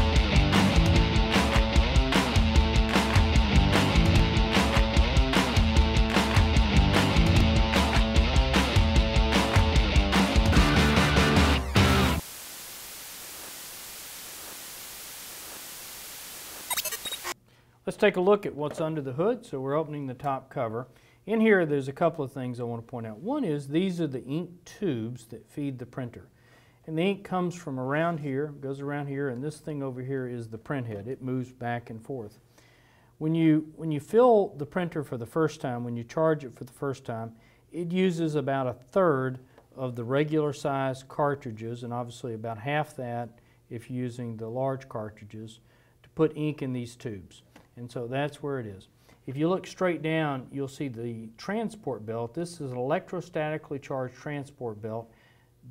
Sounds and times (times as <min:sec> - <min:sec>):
Speech: 0:17.8 - 0:26.3, 0:26.9 - 0:32.4, 0:33.2 - 0:55.1.